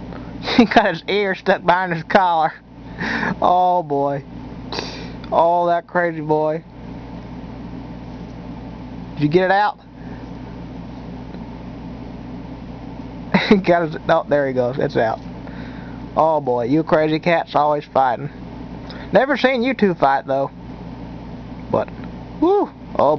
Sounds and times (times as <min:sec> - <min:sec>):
Speech: 0:00.6 - 0:02.6, 0:03.4 - 0:04.3, 0:05.3 - 0:06.7, 0:09.2 - 0:09.8, 0:13.6 - 0:15.2, 0:16.2 - 0:18.4, 0:19.1 - 0:20.6, 0:21.7 - 0:23.1.